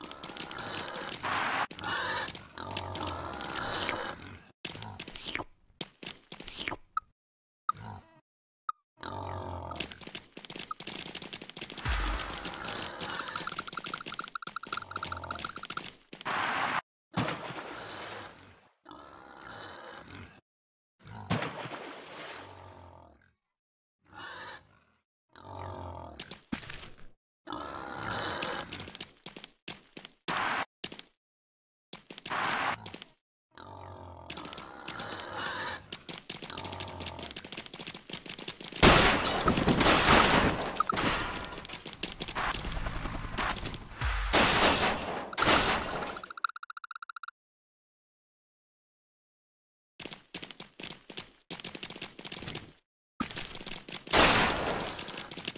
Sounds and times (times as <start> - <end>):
Oink: 0.0 - 5.4, 7.7 - 8.2, 9.0 - 10.0, 12.3 - 13.5, 17.7 - 20.4, 21.0 - 21.4, 22.4 - 23.4, 24.1 - 26.3, 27.5 - 28.9, 33.6 - 35.9.